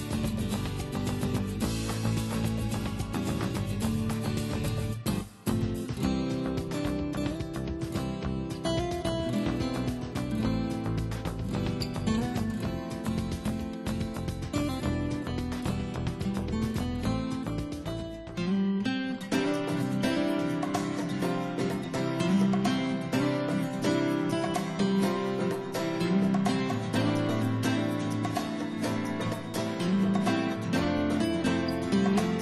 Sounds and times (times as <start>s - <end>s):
Music: 0.0s - 32.4s.